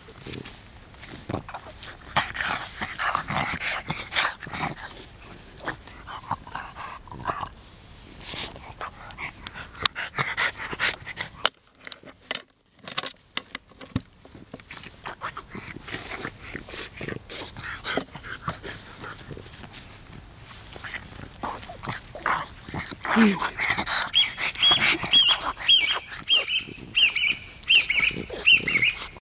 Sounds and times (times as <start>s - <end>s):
Canidae, dogs, wolves: 1.2s - 7.6s, 8.2s - 12.2s, 14.4s - 29.2s
Dog: 20.7s - 29.2s.